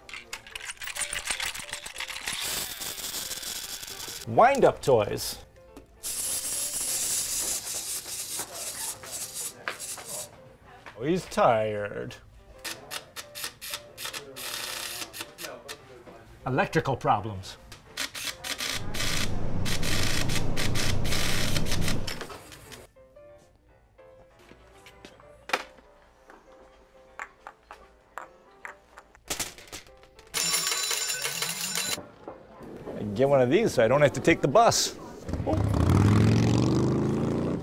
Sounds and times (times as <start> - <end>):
Music: 0.0 - 36.3
Speech: 15.1 - 17.6, 33.0 - 35.6.